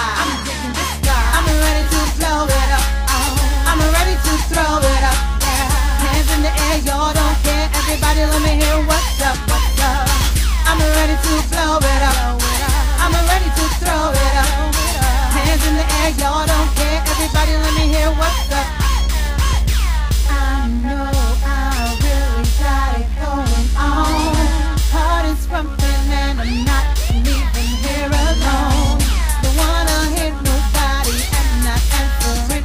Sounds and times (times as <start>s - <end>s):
Music: 0.0s - 32.6s.